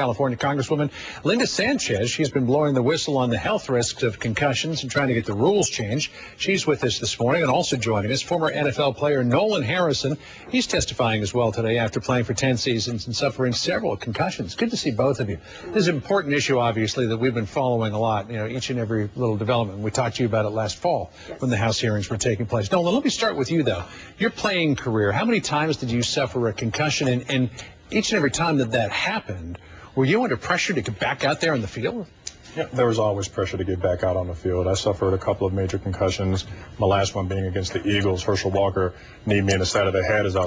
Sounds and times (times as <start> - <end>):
Speech: 0.0 - 40.4.